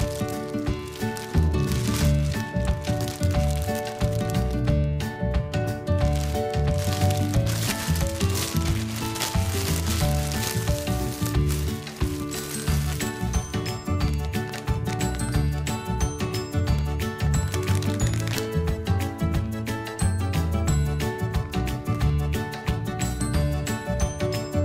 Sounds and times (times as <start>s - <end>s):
Music: 0.0s - 24.6s.